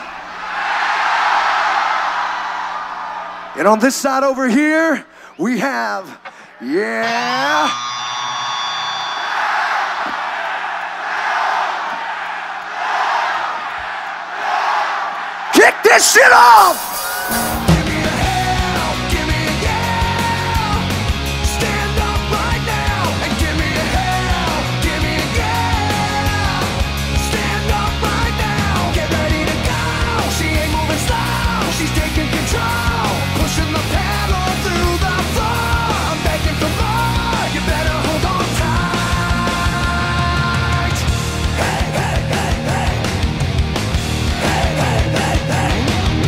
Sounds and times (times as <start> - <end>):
Speech: 3.6 - 7.7, 15.6 - 17.0
Music: 16.9 - 46.2.